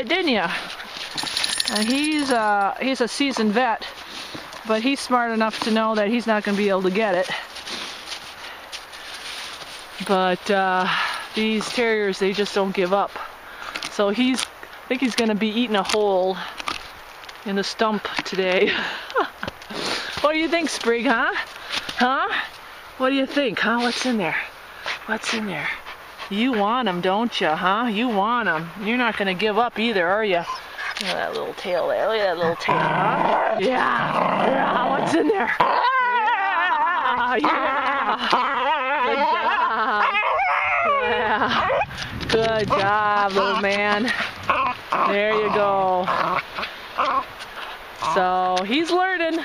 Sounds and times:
Outside, rural or natural: 0:00.0 - 0:49.4
Speech: 0:04.7 - 0:07.4, 0:20.2 - 0:21.4, 0:22.0 - 0:24.5, 0:25.1 - 0:35.6, 0:42.3 - 0:44.2, 0:45.0 - 0:46.1, 0:48.0 - 0:49.4.

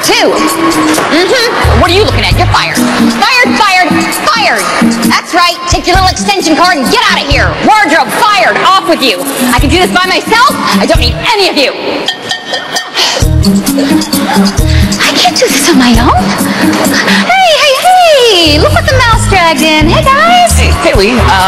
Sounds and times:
Music: 0:00.0 - 0:21.4.

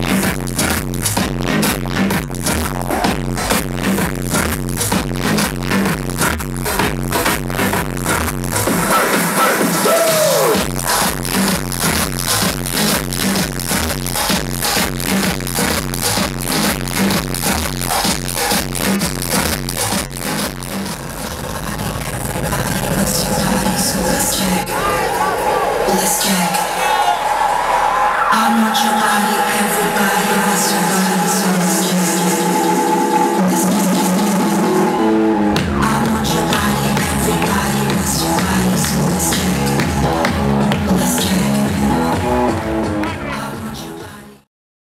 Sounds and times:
Disco: 0:00.0 - 0:44.4.

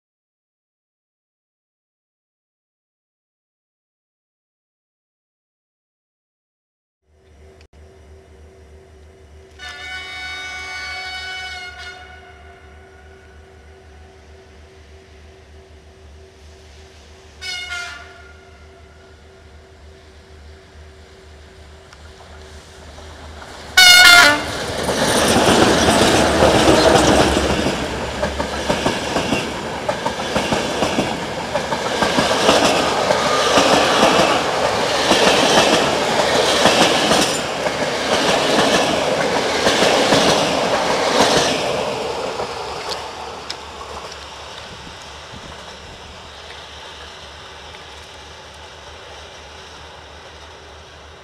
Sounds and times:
Outside, urban or manmade: 0:07.0 - 0:51.2
Railroad car, train wagon: 0:07.1 - 0:51.2
Train: 0:07.1 - 0:51.2.

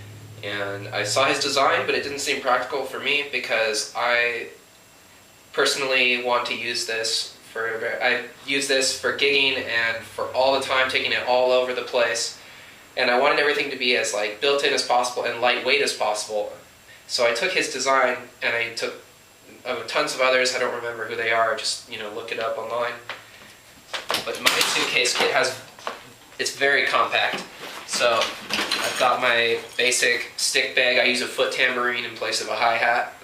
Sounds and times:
Speech: 0:00.4 - 0:04.6, 0:05.5 - 0:12.4, 0:13.0 - 0:23.1, 0:24.2 - 0:25.7, 0:26.4 - 0:33.2.

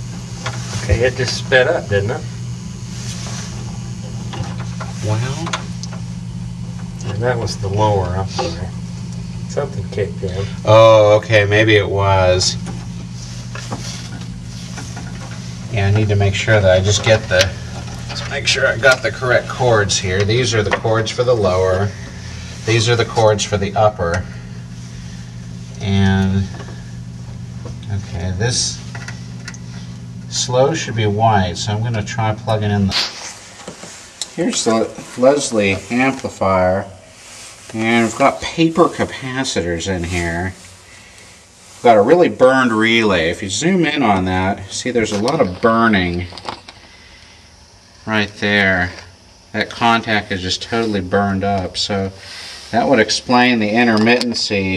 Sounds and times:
Speech: 0:00.7 - 0:02.3, 0:05.0 - 0:05.7, 0:07.0 - 0:08.8, 0:09.5 - 0:12.7, 0:15.7 - 0:22.0, 0:22.6 - 0:24.3, 0:25.8 - 0:26.6, 0:27.8 - 0:28.8, 0:30.3 - 0:33.0, 0:34.3 - 0:37.0, 0:37.7 - 0:40.6, 0:41.8 - 0:46.3, 0:48.0 - 0:54.7.

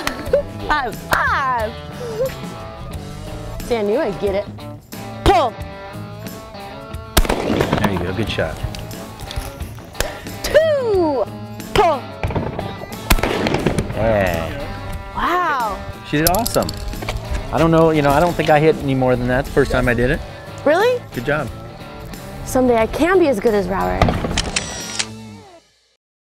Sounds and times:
Music: 0:00.0 - 0:26.0
Firecracker: 0:07.2 - 0:08.3, 0:12.2 - 0:14.5.

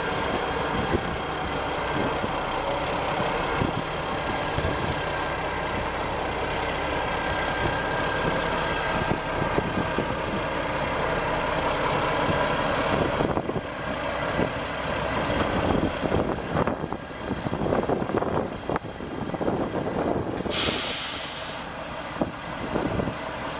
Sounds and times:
Vehicle: 0:00.0 - 0:23.5.

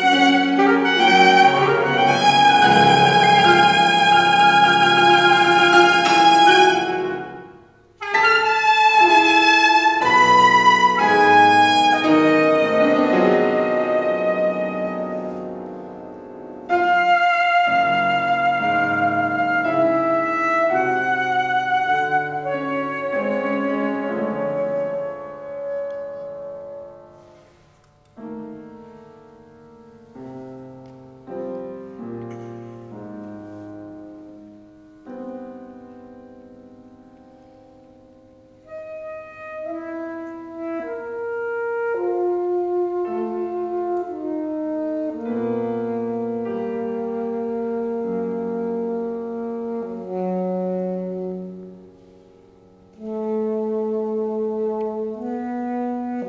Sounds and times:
Saxophone: 0:00.0 - 0:15.8, 0:16.6 - 0:27.5, 0:38.6 - 0:56.2
Brass instrument: 0:00.0 - 0:27.7, 0:38.5 - 0:56.2
Classical music: 0:00.0 - 0:56.2
Piano: 0:00.0 - 0:56.2.

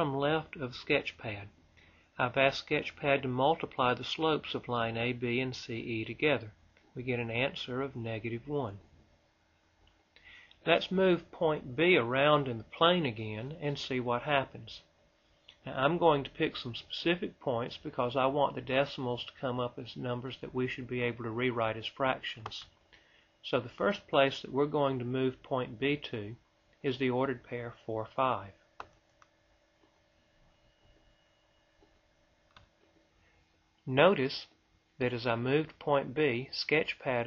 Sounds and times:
Speech: 0:00.0 - 0:01.6, 0:02.2 - 0:08.9, 0:10.6 - 0:14.9, 0:15.6 - 0:22.7, 0:23.4 - 0:28.6, 0:33.8 - 0:37.2
Inside, small room: 0:00.0 - 0:37.2.

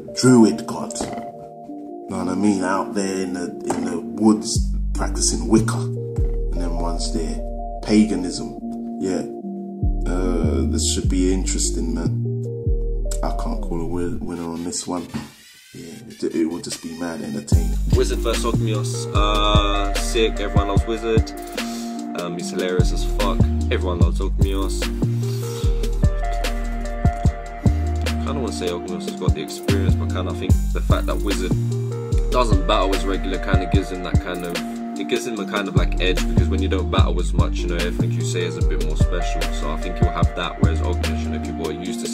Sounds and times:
Music: 0:00.0 - 0:42.1
Speech: 0:00.2 - 0:01.2, 0:02.1 - 0:05.9, 0:06.6 - 0:09.3, 0:10.1 - 0:12.2, 0:13.2 - 0:21.4, 0:22.2 - 0:24.9, 0:28.1 - 0:31.6, 0:32.3 - 0:42.1.

